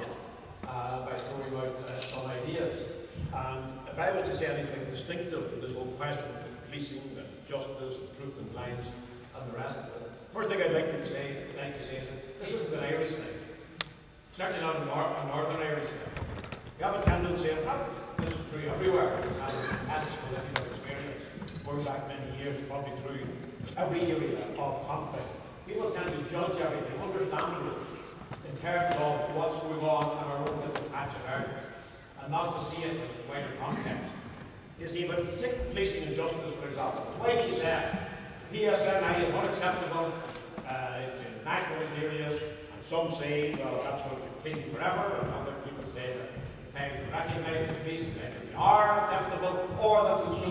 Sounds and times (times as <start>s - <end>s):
Male speech, man speaking: 0.0s - 13.4s, 14.4s - 16.1s, 16.8s - 34.2s, 34.8s - 50.5s
Narration, monologue: 0.0s - 50.5s.